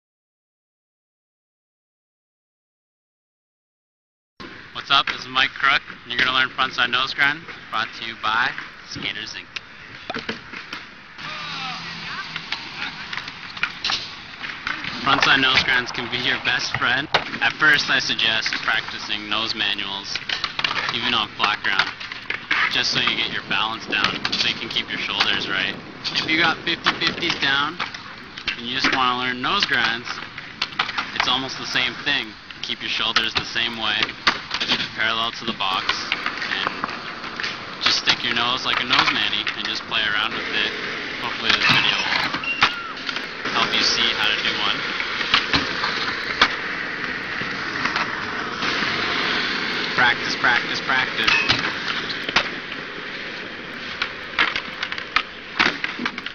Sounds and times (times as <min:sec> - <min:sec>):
Speech: 0:04.8 - 0:09.5, 0:11.2 - 0:13.1, 0:14.8 - 0:20.2, 0:20.8 - 0:21.9, 0:22.6 - 0:27.8, 0:28.5 - 0:30.2, 0:31.2 - 0:34.1, 0:34.9 - 0:36.8, 0:37.8 - 0:42.3, 0:43.5 - 0:44.8, 0:50.0 - 0:51.5.